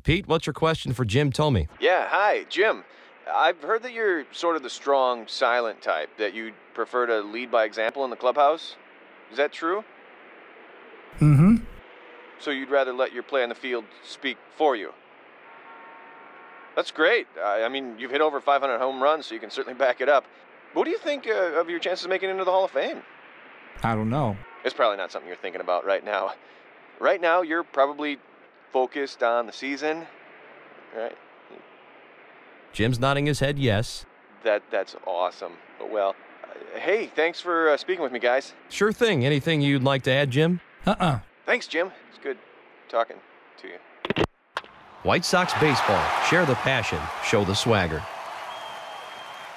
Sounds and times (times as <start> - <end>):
Radio: 0.0 - 1.8, 32.8 - 34.0
Speech: 0.0 - 9.9, 11.2 - 11.8, 12.4 - 15.0, 16.8 - 20.2, 20.8 - 23.0, 23.8 - 26.4, 27.0 - 28.2, 28.8 - 30.1, 30.9 - 31.2, 32.8 - 43.8, 45.1 - 48.1.